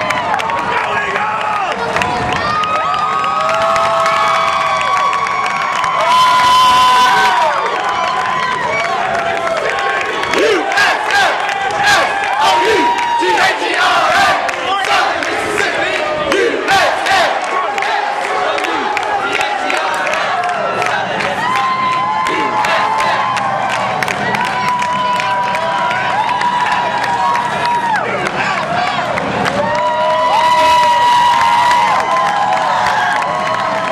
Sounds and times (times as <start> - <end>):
Cheering: 0.0 - 33.9
Crowd: 0.0 - 33.9.